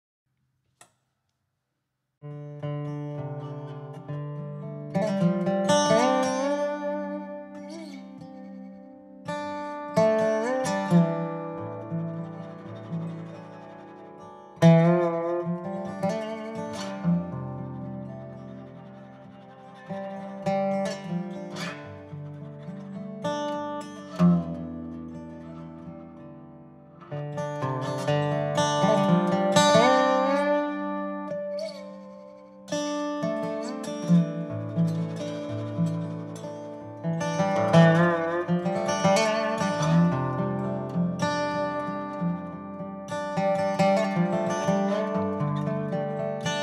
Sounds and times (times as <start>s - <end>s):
Music: 2.2s - 46.6s.